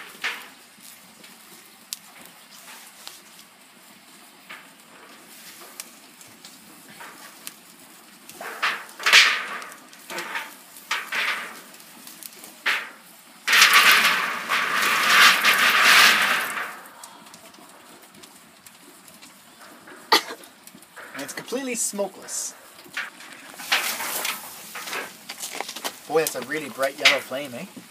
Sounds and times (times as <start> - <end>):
Fire: 0.0 - 27.9
Wind: 0.0 - 27.9.